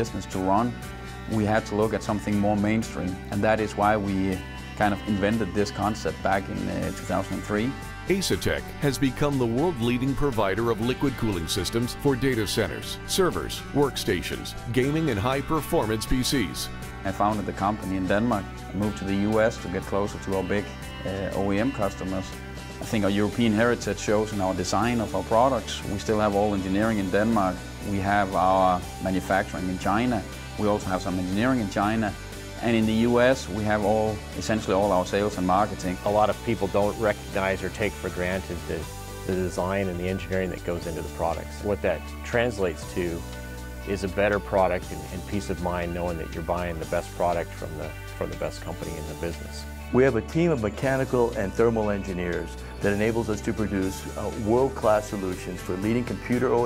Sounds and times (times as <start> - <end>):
Speech: 0.0 - 43.2, 43.8 - 56.6
Music: 0.0 - 56.6.